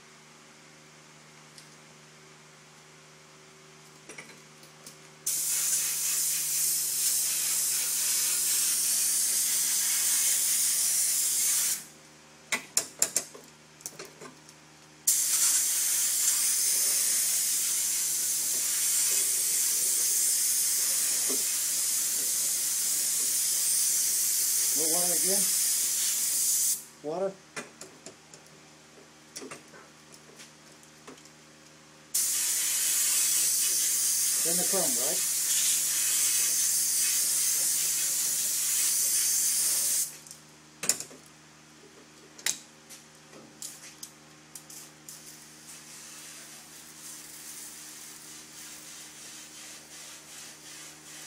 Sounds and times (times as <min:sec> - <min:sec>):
Spray: 0:05.3 - 0:11.9, 0:15.1 - 0:26.9, 0:32.2 - 0:40.2, 0:44.7 - 0:51.2
Speech: 0:24.8 - 0:25.5, 0:27.0 - 0:27.4, 0:34.4 - 0:35.3.